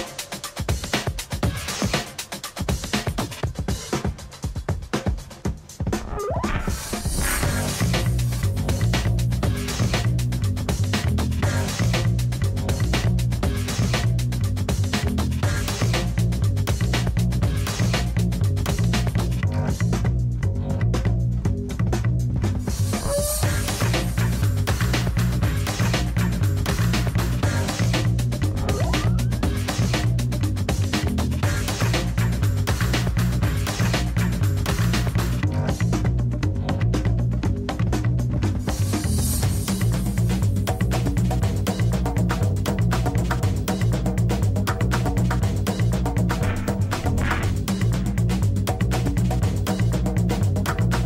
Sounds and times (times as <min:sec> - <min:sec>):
Music: 0:00.0 - 0:51.0.